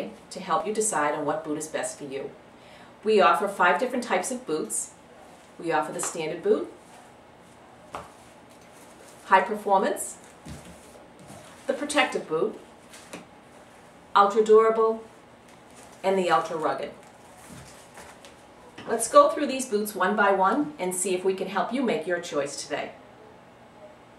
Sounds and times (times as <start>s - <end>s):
Speech: 5.6s - 6.8s, 9.3s - 10.2s, 11.7s - 12.6s, 16.0s - 17.0s, 18.8s - 23.0s.